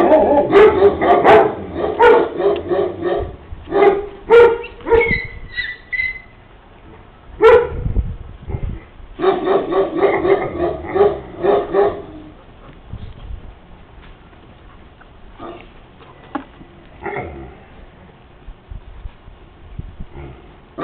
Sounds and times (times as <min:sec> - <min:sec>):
Bow-wow: 0:00.0 - 0:05.3, 0:07.4 - 0:07.8, 0:09.2 - 0:12.3.